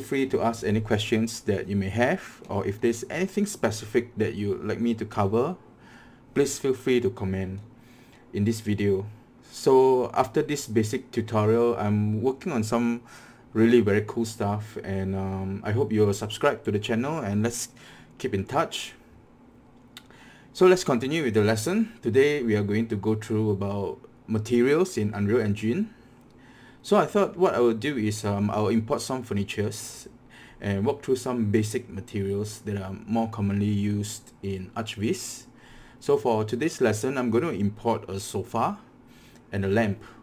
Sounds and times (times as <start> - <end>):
Speech: 0.0 - 5.6, 6.4 - 7.7, 8.3 - 19.0, 20.6 - 26.0, 26.8 - 38.9, 39.5 - 40.2.